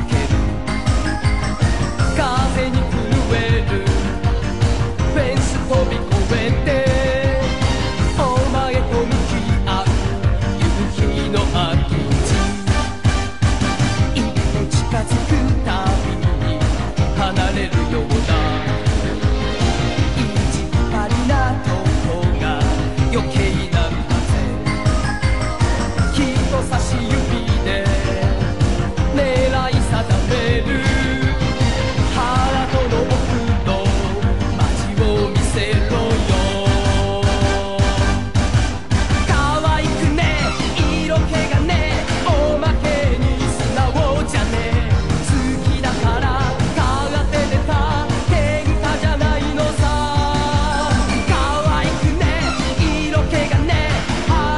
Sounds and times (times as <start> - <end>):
Music: 0.0 - 54.5.